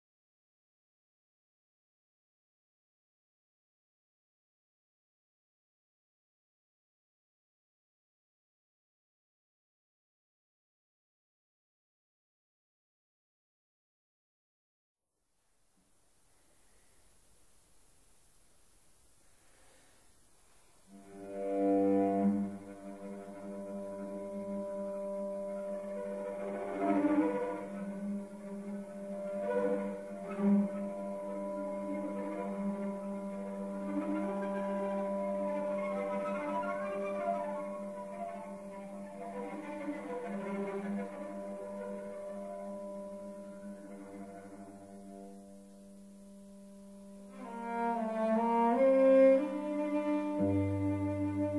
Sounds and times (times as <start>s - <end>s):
Cello: 19.3s - 51.5s.